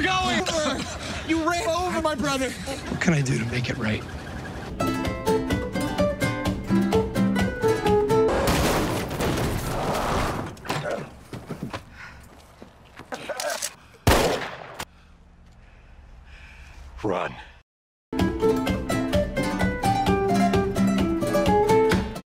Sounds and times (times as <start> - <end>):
Music: 4.8 - 8.3, 18.2 - 22.2
Speech: 17.0 - 17.5.